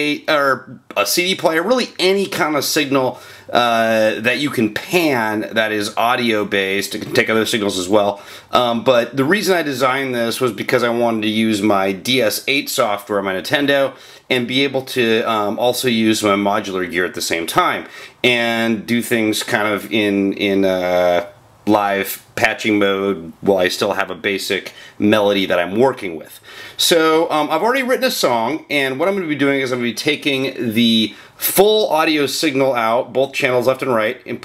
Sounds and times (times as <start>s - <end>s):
Speech: 0.0s - 34.4s.